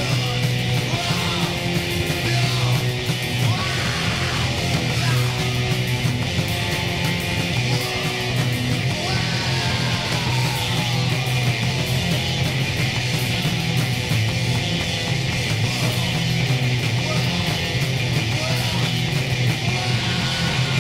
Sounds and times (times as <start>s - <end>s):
Punk rock: 0.0s - 20.8s.